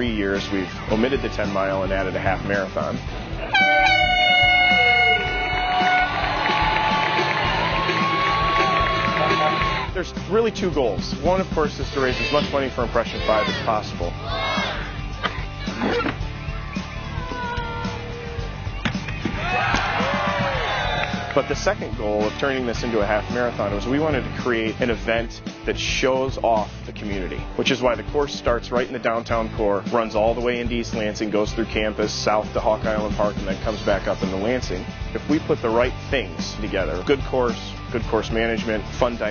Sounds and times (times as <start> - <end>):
Speech: 0.0 - 3.0, 10.0 - 14.2, 21.4 - 39.3
Music: 0.0 - 39.3.